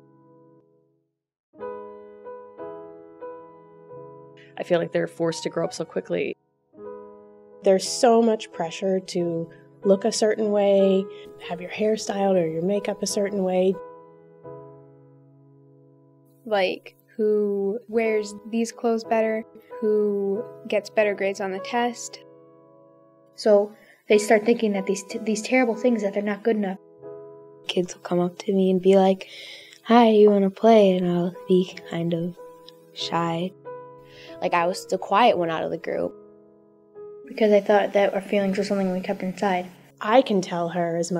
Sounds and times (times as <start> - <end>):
Music: 0.0 - 41.1
Speech: 4.6 - 6.4, 7.6 - 13.8, 16.5 - 22.2, 23.4 - 26.8, 27.7 - 32.4, 33.0 - 33.5, 34.4 - 36.1, 37.3 - 41.1.